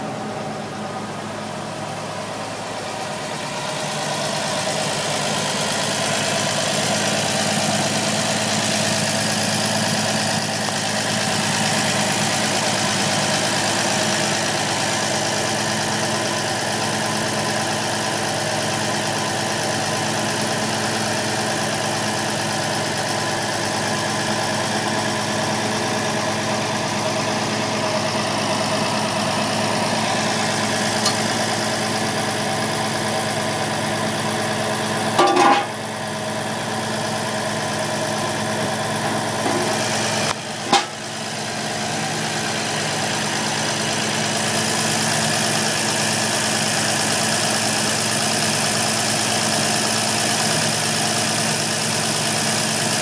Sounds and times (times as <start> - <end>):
Vehicle: 0.0 - 53.0.